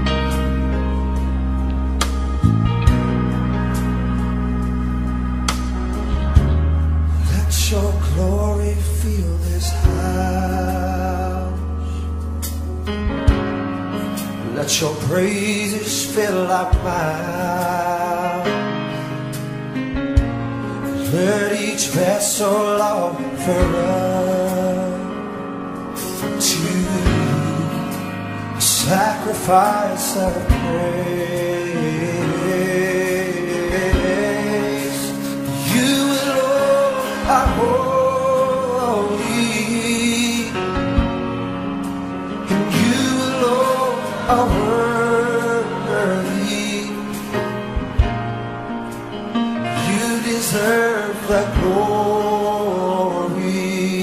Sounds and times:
Music: 0:00.0 - 0:54.0.

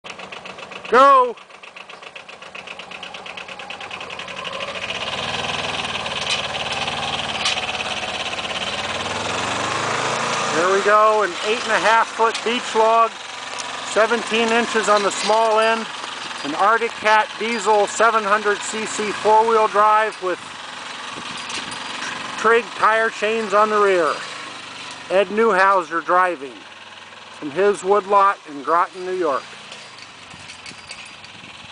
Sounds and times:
Outside, rural or natural: 0:00.0 - 0:31.7
Vehicle: 0:00.0 - 0:31.7
Speech: 0:00.9 - 0:01.4, 0:10.5 - 0:13.2, 0:13.9 - 0:15.9, 0:16.5 - 0:20.4, 0:22.4 - 0:24.2, 0:25.1 - 0:26.6, 0:27.4 - 0:29.4.

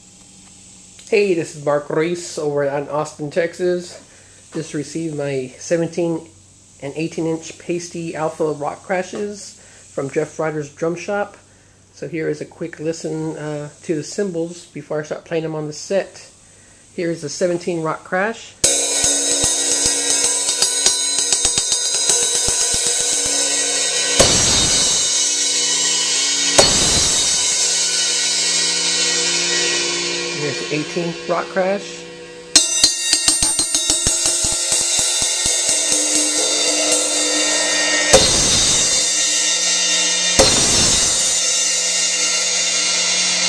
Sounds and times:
Speech: 0:01.0 - 0:16.4, 0:17.0 - 0:18.6, 0:30.4 - 0:32.1
Music: 0:18.6 - 0:43.4.

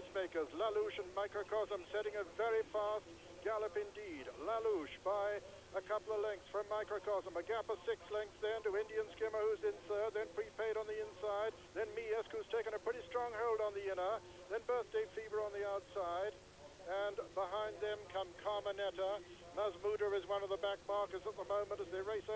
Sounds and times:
Speech: 0:00.0 - 0:22.3.

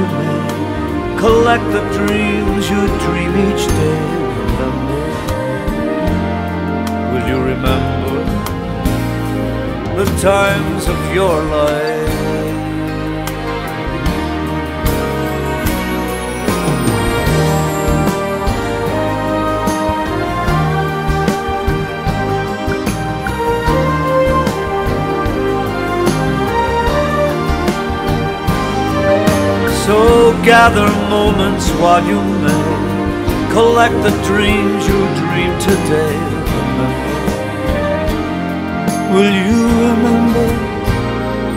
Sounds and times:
Background music: 0:00.0 - 0:41.5.

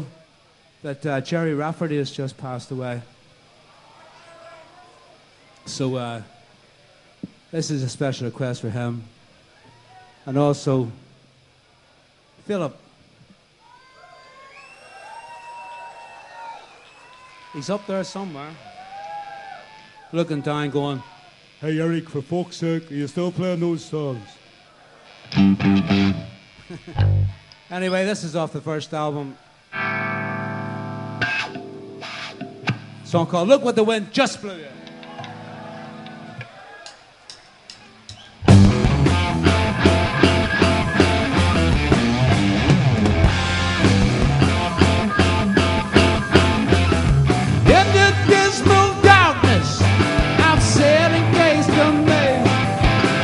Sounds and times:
Speech: 0:00.8 - 0:03.1, 0:20.2 - 0:24.4, 0:27.7 - 0:29.4, 0:33.1 - 0:34.8
Music: 0:25.3 - 0:26.3, 0:29.7 - 0:33.1, 0:38.4 - 0:53.2.

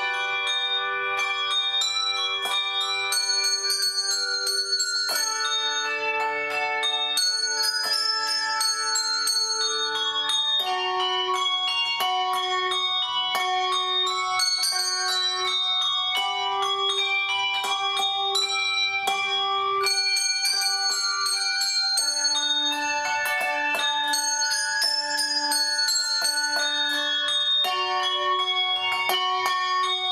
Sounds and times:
Bell: 0:00.0 - 0:30.1.

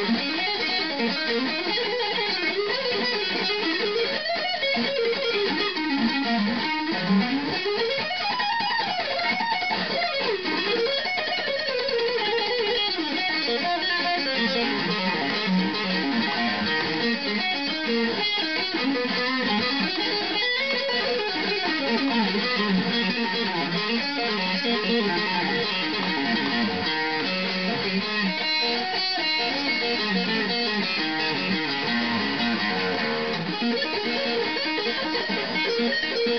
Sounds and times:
Bass guitar: 0:14.2 - 0:36.3.

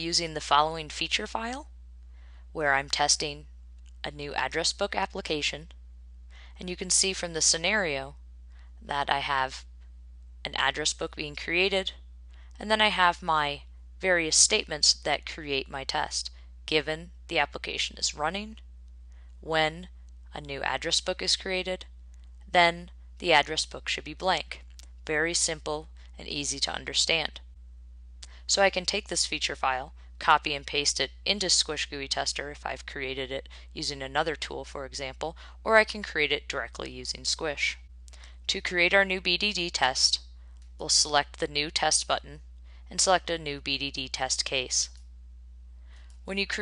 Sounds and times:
Speech: 0:00.0 - 0:01.7, 0:02.6 - 0:03.5, 0:04.1 - 0:05.7, 0:06.6 - 0:08.2, 0:08.8 - 0:09.6, 0:10.5 - 0:12.0, 0:12.6 - 0:18.6, 0:19.4 - 0:21.8, 0:22.5 - 0:27.4, 0:28.2 - 0:37.8, 0:38.5 - 0:40.2, 0:40.8 - 0:45.0, 0:46.3 - 0:46.6.

